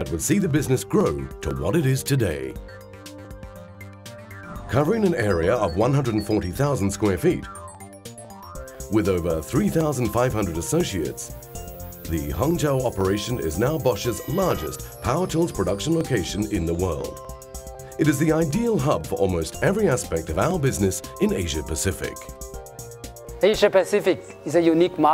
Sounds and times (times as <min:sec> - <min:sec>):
Speech: 0:00.0 - 0:02.6, 0:04.7 - 0:07.5, 0:08.9 - 0:11.3, 0:12.1 - 0:17.1, 0:18.0 - 0:22.2, 0:23.4 - 0:25.1
Music: 0:00.0 - 0:25.1.